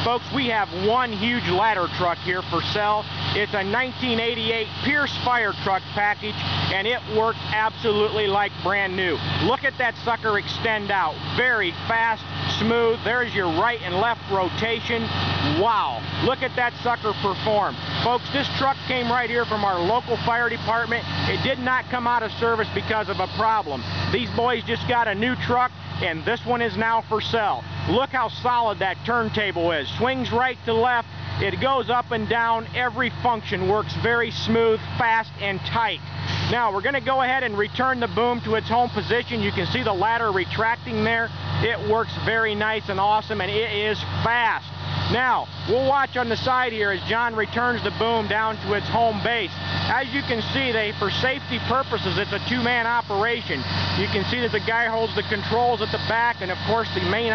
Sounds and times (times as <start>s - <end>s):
Speech: 0.0s - 57.3s
Truck: 0.0s - 57.3s.